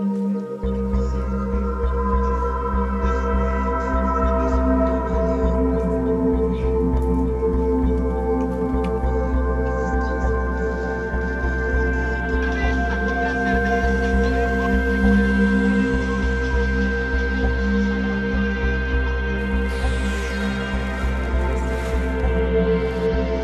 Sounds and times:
Music: 0.0s - 23.4s.

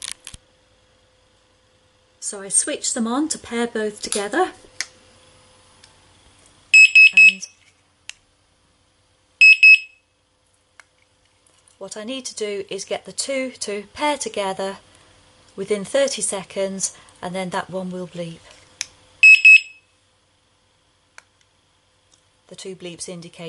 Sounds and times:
Speech: 2.2s - 4.6s, 11.8s - 14.8s, 15.6s - 18.5s, 22.5s - 23.4s.

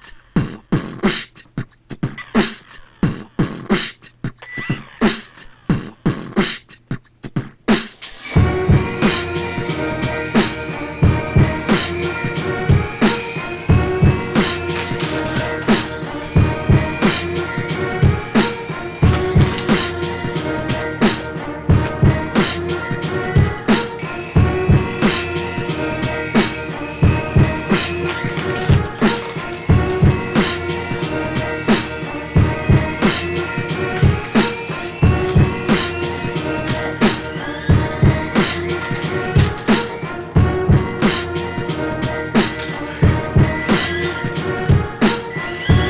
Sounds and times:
Music: 0.0s - 45.8s.

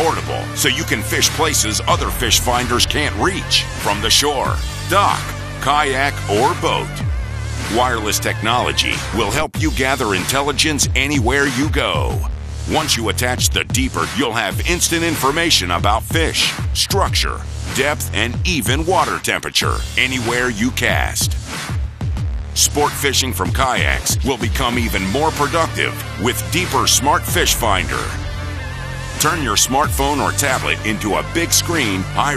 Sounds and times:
Speech: 0.0s - 7.0s, 7.7s - 21.4s, 22.6s - 28.2s, 29.2s - 32.3s
Music: 0.0s - 32.3s.

